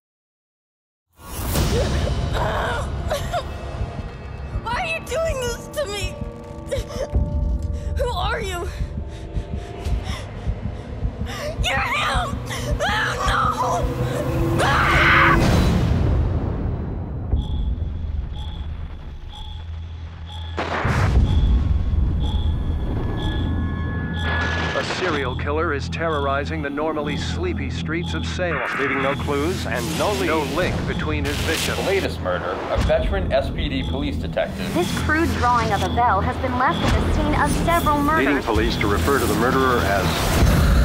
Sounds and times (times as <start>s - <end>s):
Music: 1.2s - 40.8s.